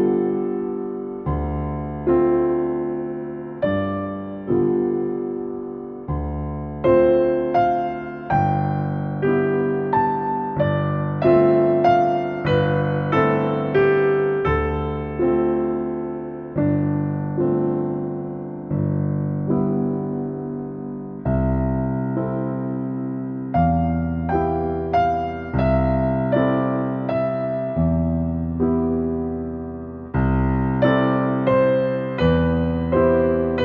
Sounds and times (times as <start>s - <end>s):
Music: 0.0s - 33.6s.